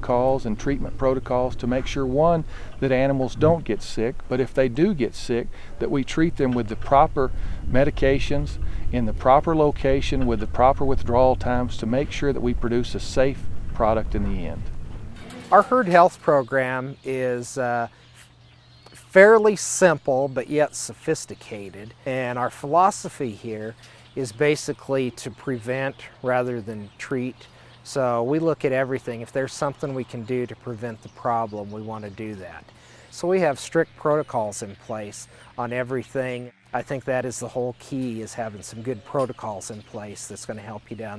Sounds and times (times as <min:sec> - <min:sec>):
Speech: 0:00.0 - 0:14.7, 0:15.5 - 0:17.9, 0:19.0 - 0:41.1.